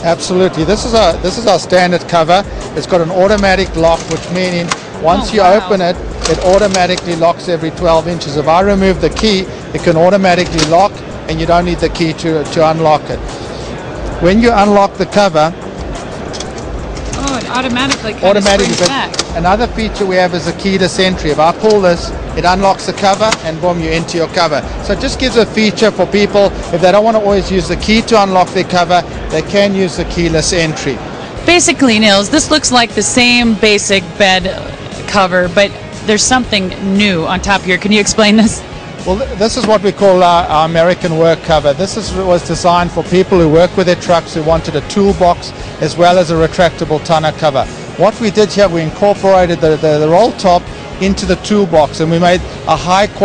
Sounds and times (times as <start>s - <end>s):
Speech: 3.2s - 13.2s, 17.2s - 31.0s.